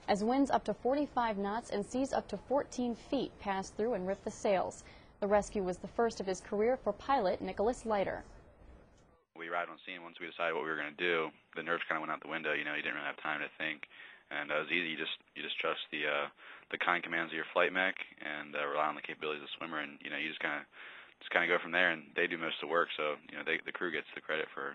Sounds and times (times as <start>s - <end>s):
Speech: 0.1s - 8.2s, 9.4s - 24.7s.